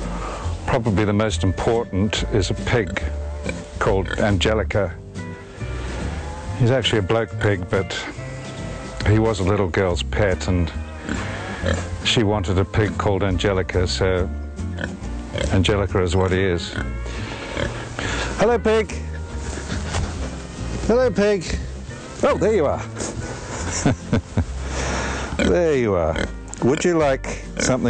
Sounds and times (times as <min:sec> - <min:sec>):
Music: 0:00.0 - 0:27.8
Speech: 0:00.7 - 0:03.1, 0:03.8 - 0:05.0, 0:06.6 - 0:08.1, 0:09.0 - 0:10.8, 0:12.0 - 0:14.3, 0:15.5 - 0:16.8, 0:18.4 - 0:19.0, 0:20.9 - 0:22.9, 0:25.4 - 0:27.8.